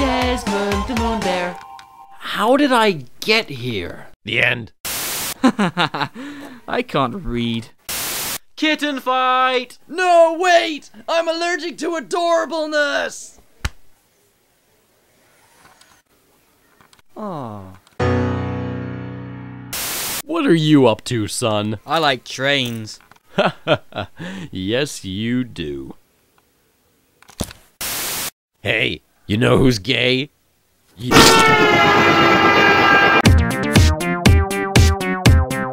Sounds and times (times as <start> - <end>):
Music: 0.0 - 2.2, 18.0 - 19.8, 33.0 - 35.7
Speech: 8.6 - 13.4, 20.2 - 23.0, 24.4 - 26.0, 28.6 - 30.3.